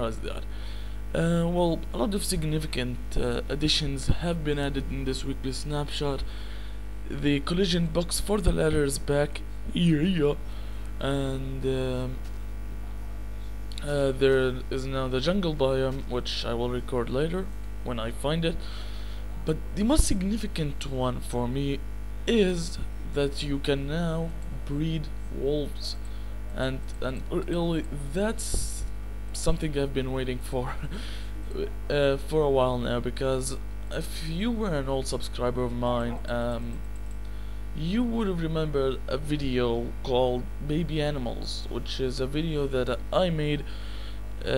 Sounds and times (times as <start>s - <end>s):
Speech: 0.0s - 0.5s, 1.1s - 6.3s, 7.1s - 12.2s, 13.7s - 18.7s, 19.4s - 36.8s, 37.8s - 43.7s.